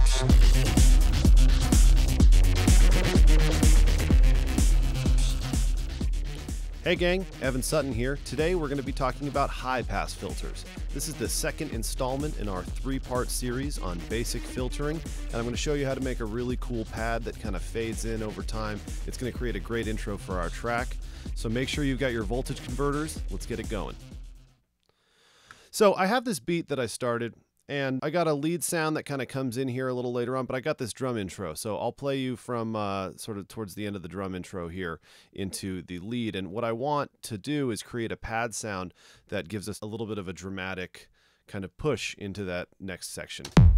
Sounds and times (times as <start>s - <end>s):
Music: 0.0s - 24.6s, 43.5s - 43.7s
Speech: 6.8s - 24.0s, 25.7s - 43.5s.